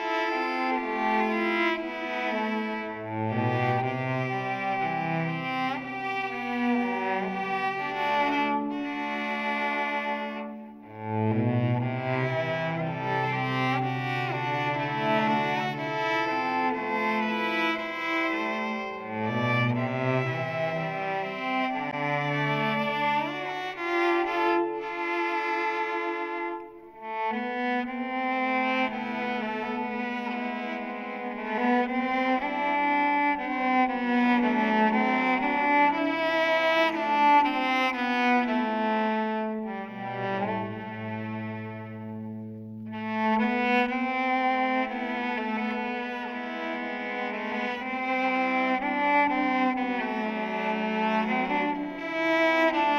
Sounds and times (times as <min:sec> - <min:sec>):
Cello: 0:00.0 - 0:52.9.